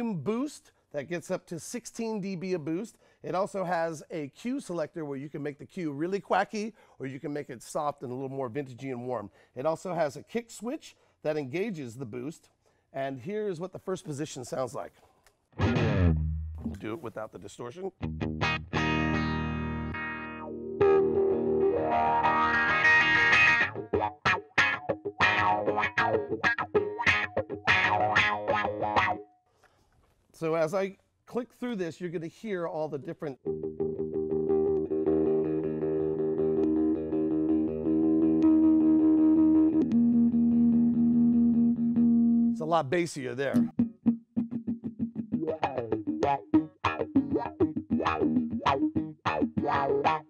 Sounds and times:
Speech: 0.0s - 15.0s, 16.6s - 18.0s, 30.4s - 33.4s, 42.6s - 43.7s
Guitar: 13.2s - 17.2s, 17.9s - 29.8s, 32.8s - 50.3s
Effects unit: 15.4s - 16.9s, 18.0s - 29.4s, 33.3s - 42.6s, 43.5s - 50.3s.

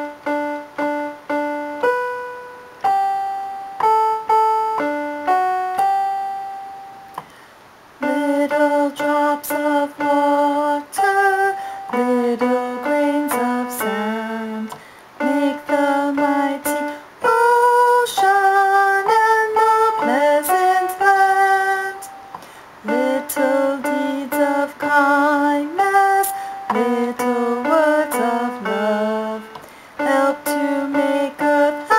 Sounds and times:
Music: 0.0s - 7.3s, 8.0s - 31.9s.

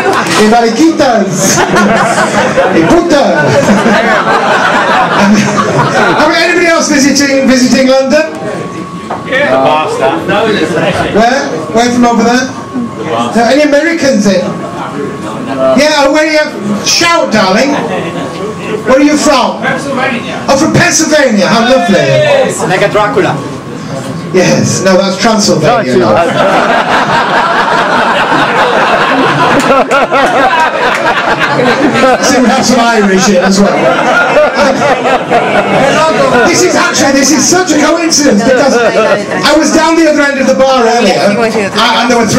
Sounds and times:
Speech: 0.0s - 1.7s, 6.1s - 8.5s, 9.2s - 23.4s, 24.3s - 26.3s, 32.0s - 33.9s, 35.8s - 42.3s.

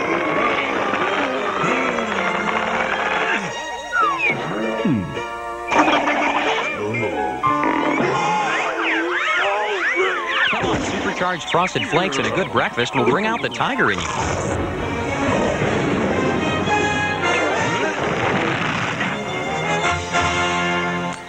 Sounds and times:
Music: 0.0s - 21.2s
Speech: 9.0s - 14.1s.

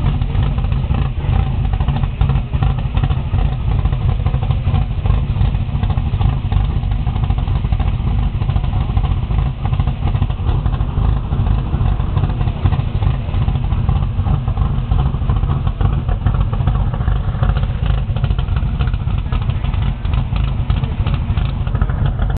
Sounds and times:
Vehicle: 0.0s - 22.4s.

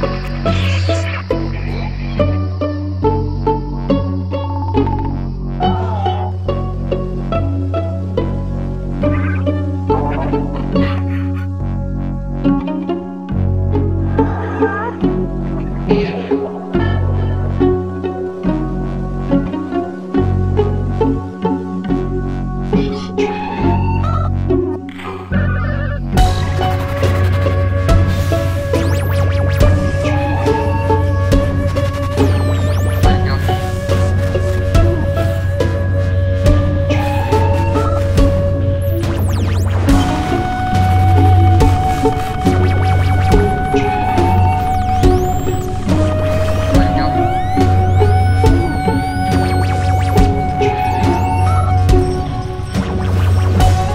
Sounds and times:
Music: 0.0s - 53.9s.

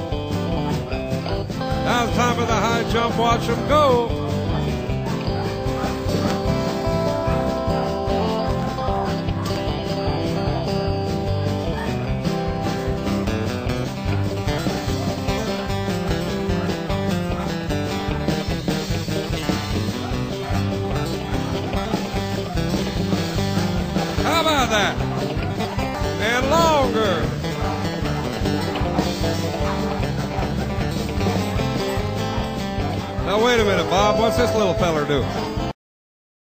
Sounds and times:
Music: 0.0s - 35.8s
Speech: 1.8s - 4.2s, 24.2s - 25.0s, 26.2s - 27.4s, 33.2s - 35.4s.

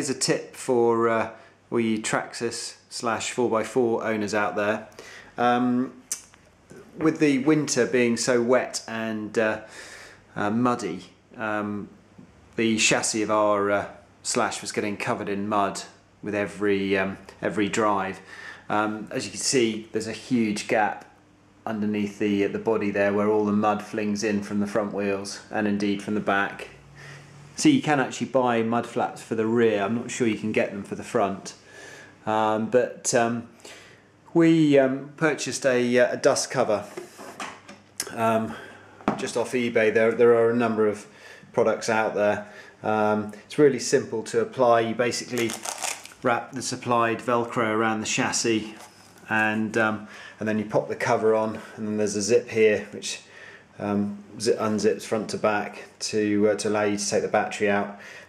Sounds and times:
Speech: 0.0s - 9.7s, 10.4s - 12.0s, 12.6s - 26.8s, 27.6s - 31.6s, 32.2s - 33.6s, 34.3s - 37.1s, 38.0s - 58.0s.

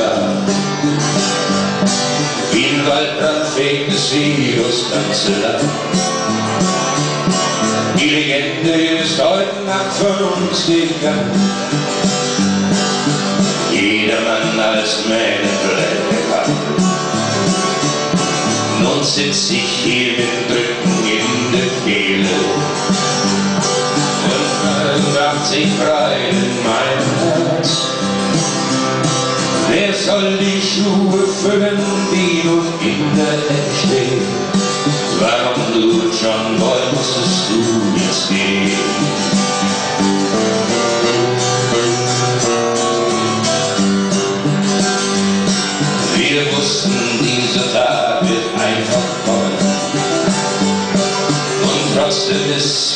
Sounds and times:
Country: 0.0s - 52.9s.

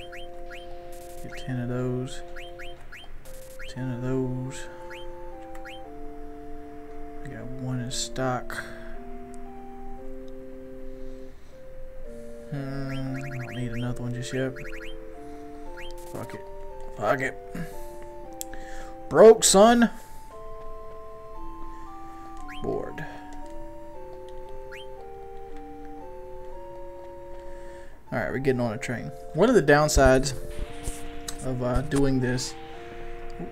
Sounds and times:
Music: 0.0s - 33.5s.

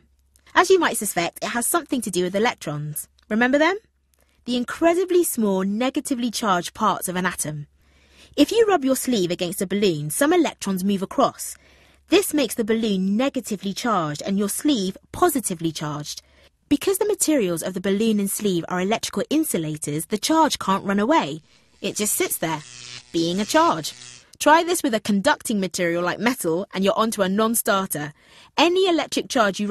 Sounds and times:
Speech: 0.6s - 3.8s, 4.5s - 7.7s, 8.4s - 22.6s, 23.2s - 29.7s.

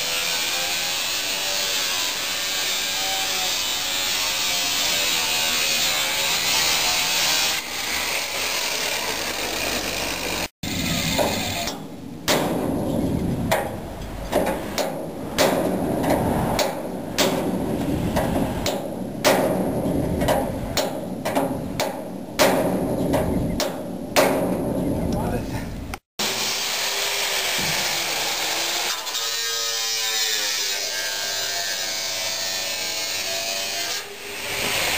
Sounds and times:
Speech: 25.0s - 25.7s.

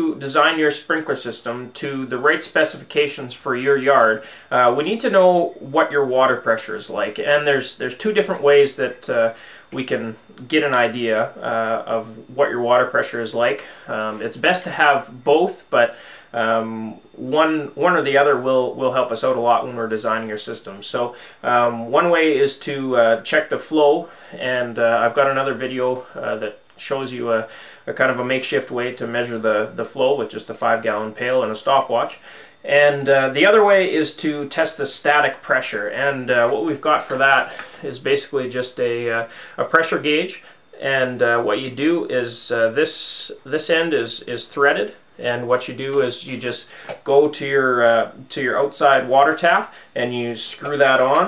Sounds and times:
Speech: 0.0s - 51.2s.

